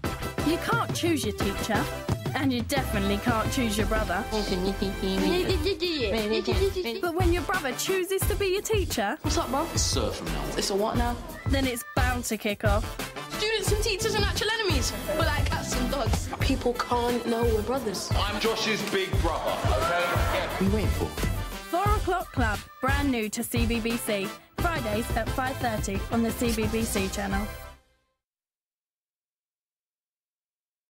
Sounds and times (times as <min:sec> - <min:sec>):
Music: 0:00.0 - 0:28.2
Speech: 0:00.4 - 0:12.8, 0:13.4 - 0:21.1, 0:21.7 - 0:27.5.